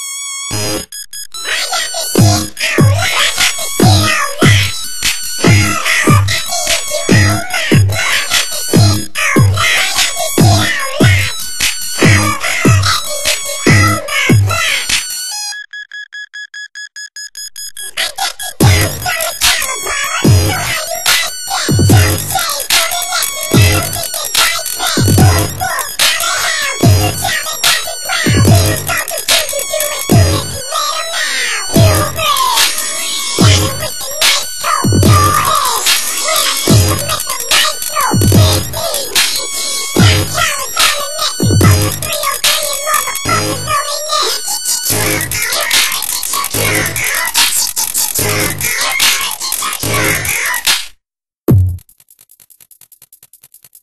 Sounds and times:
Music: 0:00.4 - 0:15.6, 0:18.4 - 0:50.4.

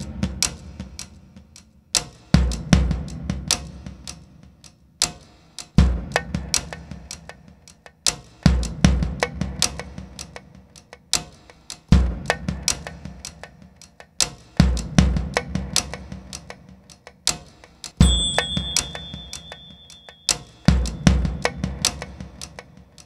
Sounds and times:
Percussion: 0:00.0 - 0:23.0.

